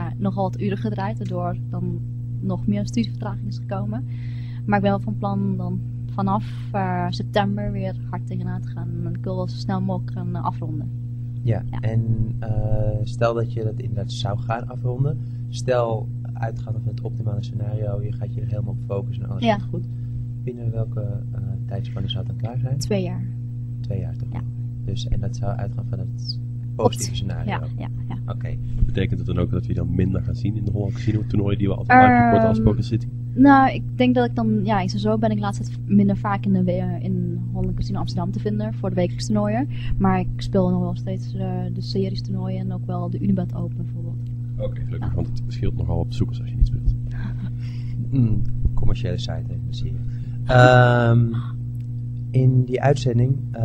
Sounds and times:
Speech: 0.0s - 4.0s, 4.7s - 10.9s, 11.5s - 19.8s, 20.5s - 23.3s, 23.9s - 46.9s, 48.1s - 51.5s, 52.4s - 53.6s.

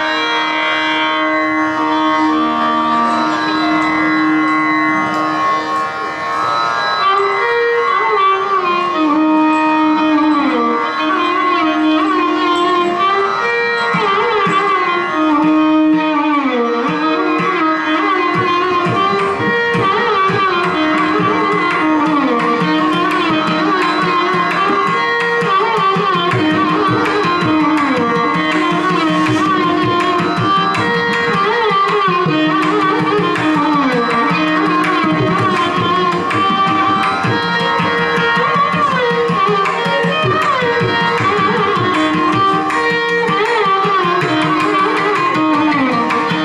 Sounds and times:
Violin, fiddle: 0.0s - 46.4s.

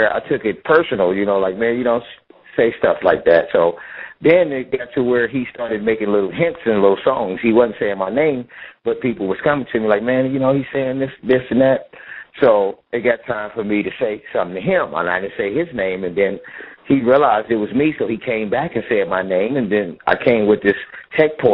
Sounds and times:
Speech: 0.0s - 21.5s.

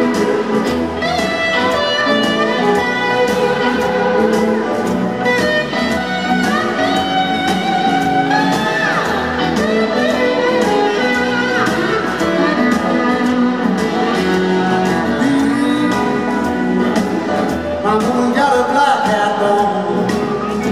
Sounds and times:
Music: 0.0s - 20.7s.

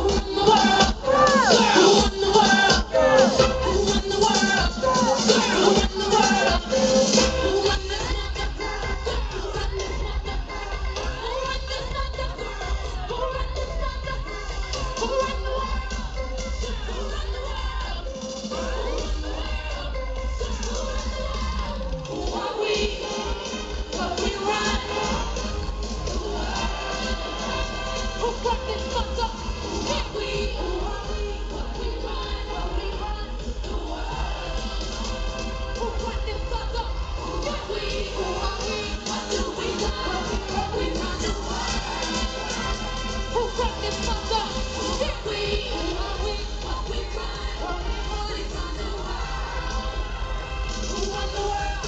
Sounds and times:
Music: 0.0s - 51.8s.

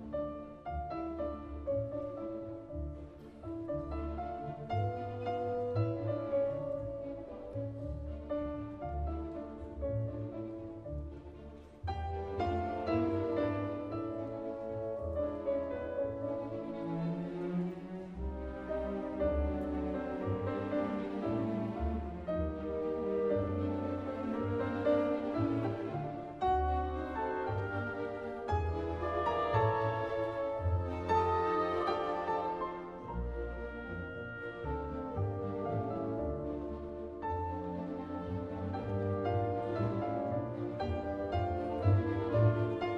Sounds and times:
Music: 0.0s - 42.9s.

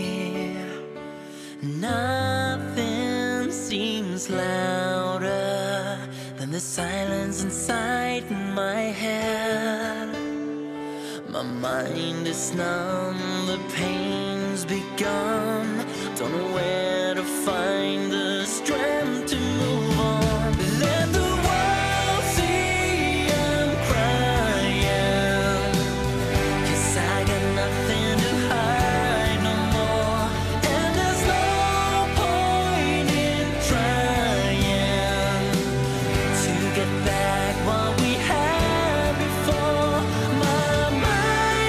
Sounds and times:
Music: 0.0s - 41.6s.

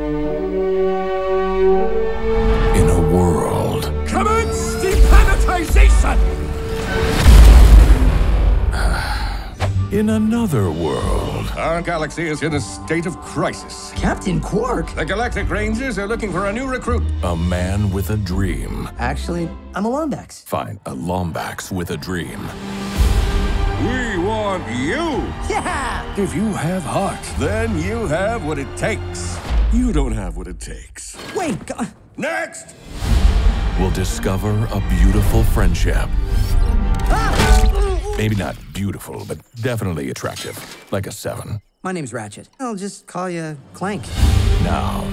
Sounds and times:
Music: 0.0s - 30.8s, 31.4s - 39.2s, 43.5s - 45.1s
Speech: 2.8s - 6.2s, 9.9s - 22.5s, 37.1s - 45.1s.

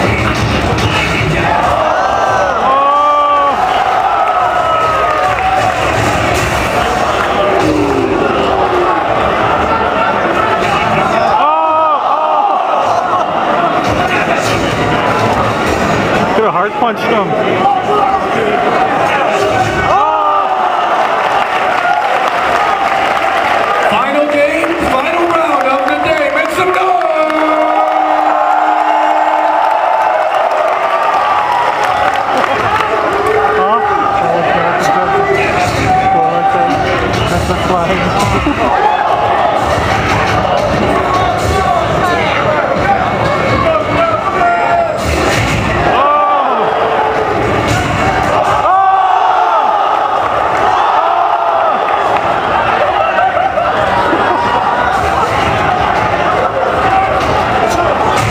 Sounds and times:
Cheering: 0.0s - 58.3s
Crowd: 0.0s - 58.3s.

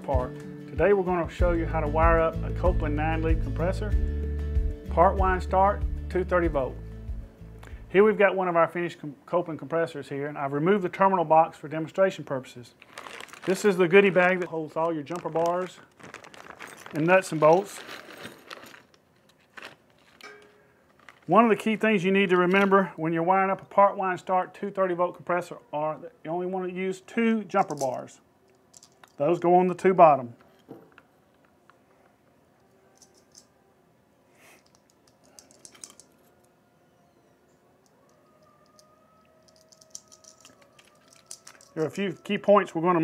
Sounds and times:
Speech: 0.0s - 4.0s, 4.9s - 6.8s, 7.9s - 12.8s, 13.5s - 15.8s, 16.9s - 17.8s, 21.3s - 28.2s, 29.2s - 30.4s, 41.8s - 43.0s.

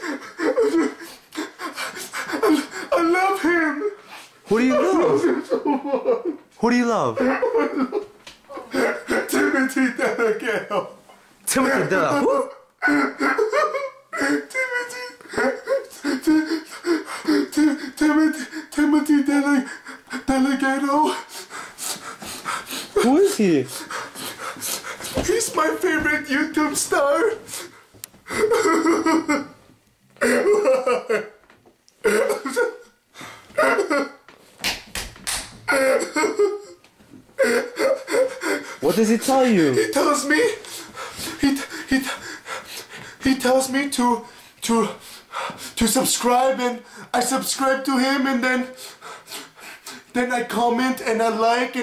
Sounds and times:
Whimper: 0.0s - 4.0s, 8.5s - 9.8s, 11.7s - 23.1s, 30.2s - 31.3s, 35.7s - 36.8s, 37.4s - 38.9s
Speech: 6.6s - 7.4s, 11.5s - 12.6s, 38.8s - 40.6s, 45.8s - 48.8s, 50.2s - 51.8s.

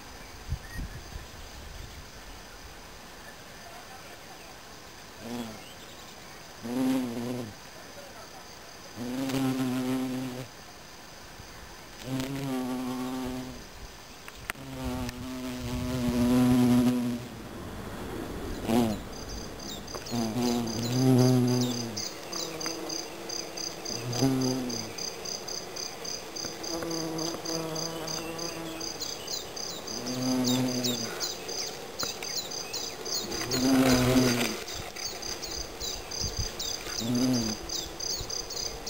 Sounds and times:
Bee, wasp, etc.: 0.0s - 38.8s
Fly, housefly: 3.3s - 17.4s, 18.5s - 38.8s.

